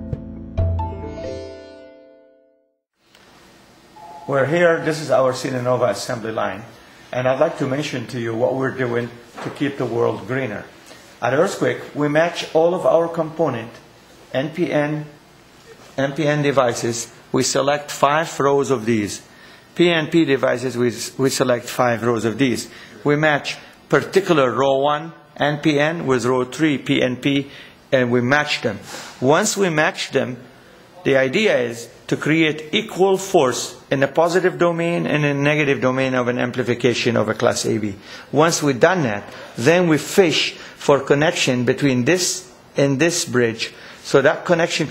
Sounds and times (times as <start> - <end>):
Speech: 4.2 - 44.9.